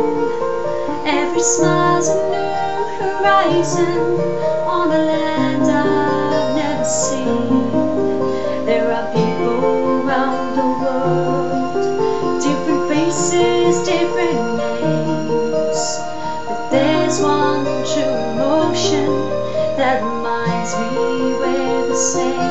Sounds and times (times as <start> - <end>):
Music: 0.0 - 22.5
Female singing: 1.0 - 7.8, 8.6 - 16.1, 16.7 - 22.5.